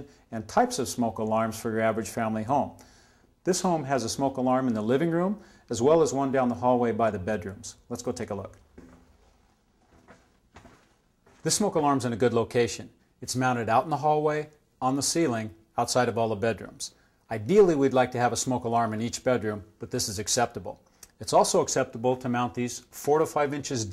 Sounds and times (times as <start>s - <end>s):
Speech: 0.0s - 2.8s, 3.4s - 8.6s, 11.4s - 23.9s.